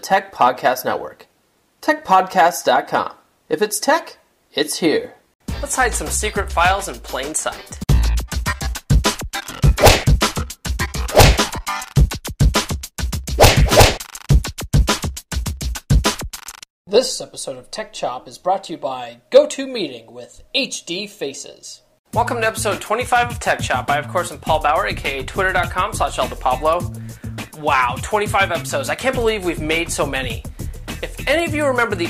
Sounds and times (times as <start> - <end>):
Speech: 0.0 - 8.1, 16.9 - 26.9, 27.5 - 32.0
Music: 5.4 - 16.6, 22.1 - 32.0.